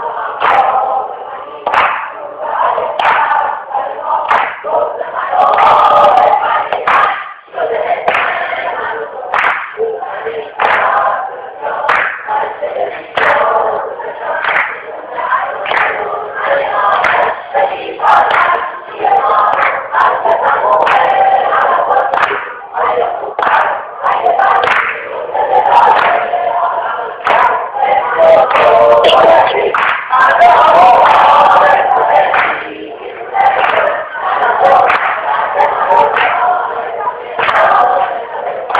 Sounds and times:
Female singing: 0.0 - 38.7.

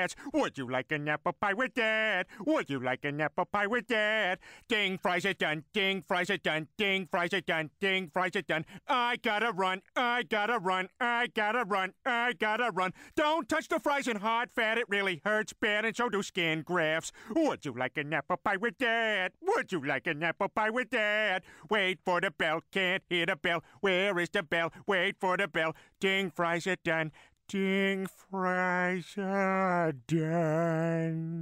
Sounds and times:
Speech: 3.8 - 29.3.

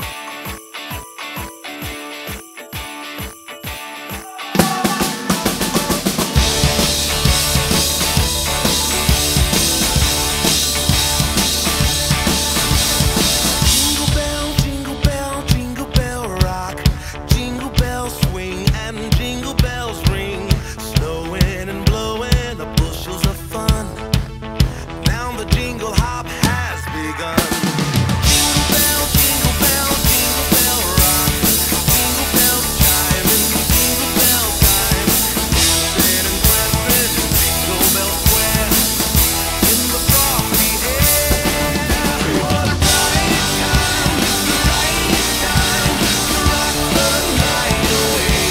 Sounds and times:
Music: 0.0 - 48.5.

